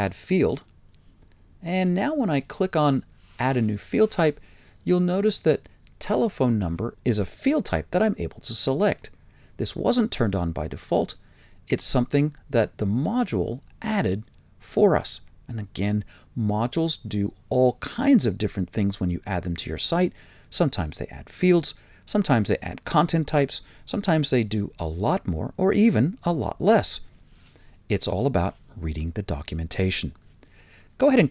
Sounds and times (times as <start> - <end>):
Speech: 0.0 - 0.7, 1.6 - 27.1, 27.9 - 30.2, 31.0 - 31.3.